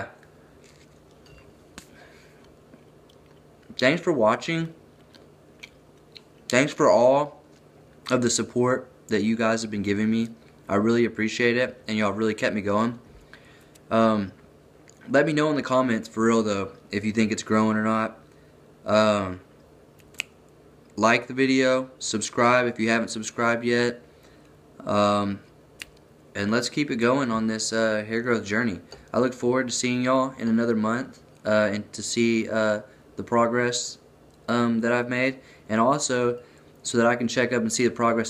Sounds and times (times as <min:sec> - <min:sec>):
Inside, small room: 0:00.0 - 0:38.3
Speech: 0:03.7 - 0:04.8, 0:06.5 - 0:07.4, 0:08.1 - 0:13.0, 0:13.9 - 0:14.4, 0:15.1 - 0:18.2, 0:18.9 - 0:19.5, 0:21.0 - 0:24.0, 0:24.8 - 0:25.5, 0:26.4 - 0:38.3.